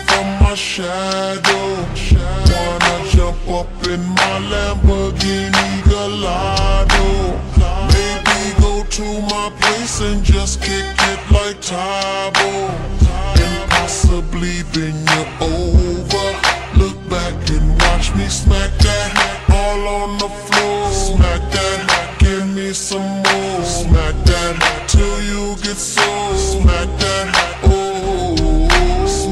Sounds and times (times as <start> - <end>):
Music: 0.0 - 29.3.